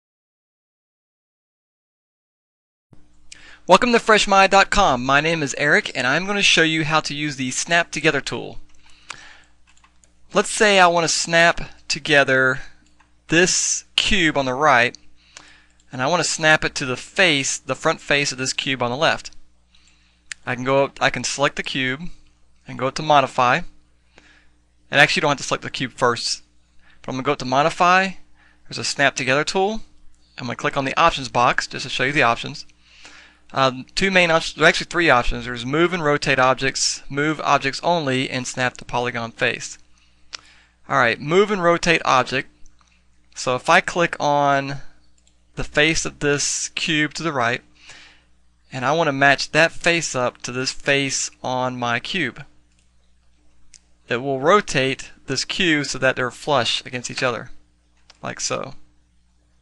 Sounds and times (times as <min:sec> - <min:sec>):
Speech: 0:03.7 - 0:08.6, 0:10.3 - 0:15.0, 0:15.9 - 0:19.4, 0:20.4 - 0:23.8, 0:24.9 - 0:26.5, 0:27.1 - 0:32.7, 0:33.5 - 0:39.8, 0:40.9 - 0:42.5, 0:43.4 - 0:45.0, 0:45.6 - 0:47.7, 0:48.7 - 0:52.5, 0:54.1 - 0:57.6, 0:58.2 - 0:58.9.